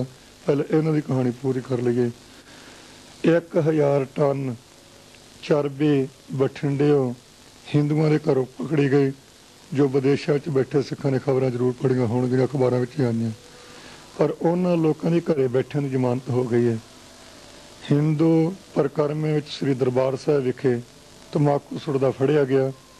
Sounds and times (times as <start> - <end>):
Male speech, man speaking: 0.0 - 2.2, 3.2 - 4.6, 5.4 - 13.4, 14.2 - 16.8, 17.8 - 22.8
Narration, monologue: 0.0 - 22.9.